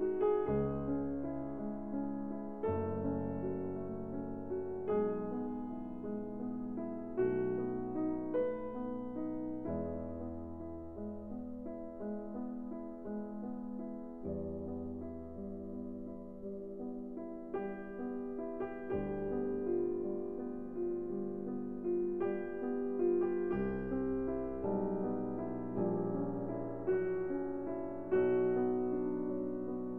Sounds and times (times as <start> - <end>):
Music: 0.0 - 29.9.